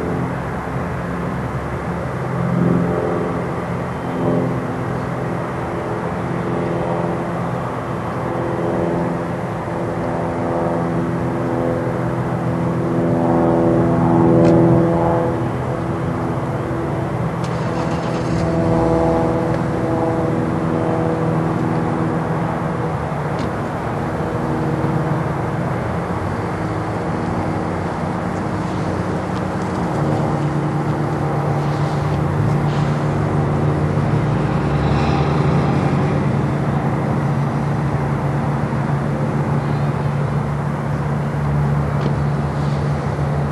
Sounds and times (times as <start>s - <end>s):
Fixed-wing aircraft, airplane: 0.0s - 43.5s.